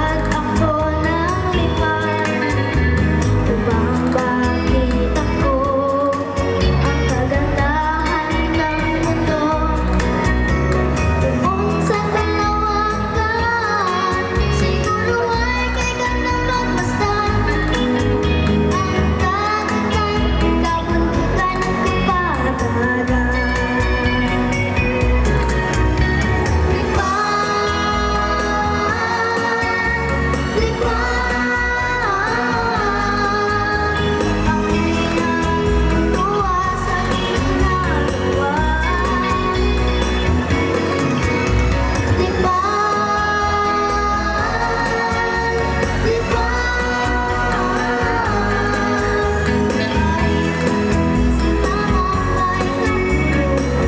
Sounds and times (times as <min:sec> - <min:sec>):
Rhythm and blues: 0:00.0 - 0:53.8.